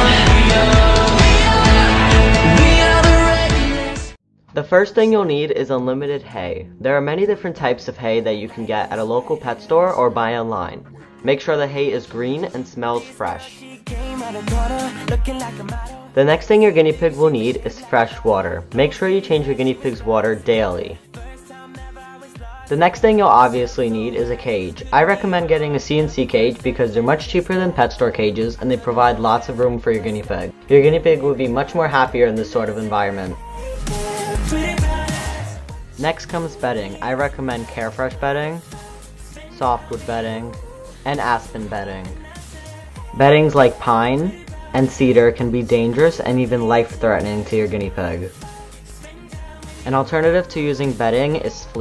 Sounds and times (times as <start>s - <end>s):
Music: 0.0s - 51.8s
Speech: 4.6s - 13.6s, 16.2s - 21.0s, 22.7s - 33.4s, 36.0s - 38.7s, 39.5s - 42.2s, 43.2s - 48.4s, 49.9s - 51.8s.